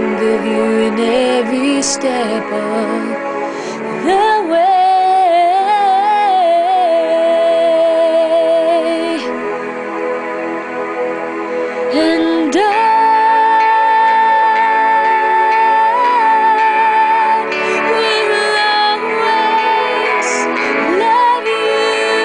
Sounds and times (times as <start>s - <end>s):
Female singing: 0.0s - 3.2s, 4.0s - 9.3s, 11.9s - 22.2s
Music: 0.0s - 22.2s.